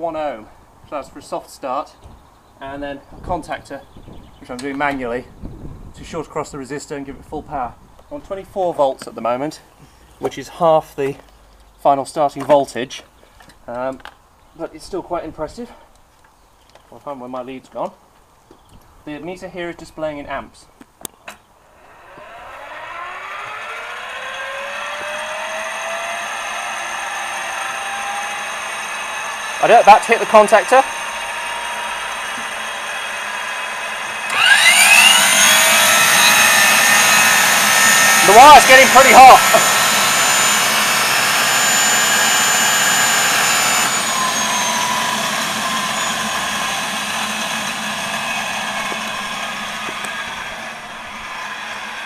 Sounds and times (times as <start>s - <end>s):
Speech: 0.0s - 2.0s, 2.6s - 5.3s, 6.0s - 11.2s, 11.8s - 13.1s, 13.7s - 15.9s, 16.9s - 18.0s, 19.1s - 20.7s, 29.6s - 30.9s, 38.2s - 39.6s.